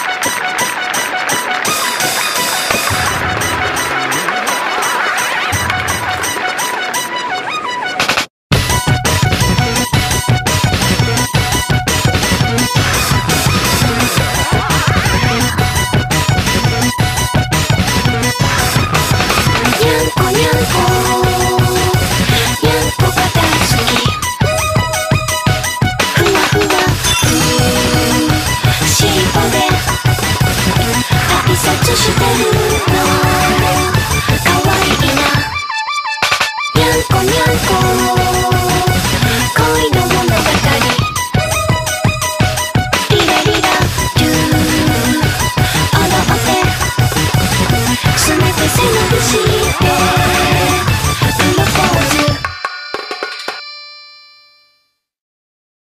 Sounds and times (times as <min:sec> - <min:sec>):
Music: 0:00.0 - 0:55.1.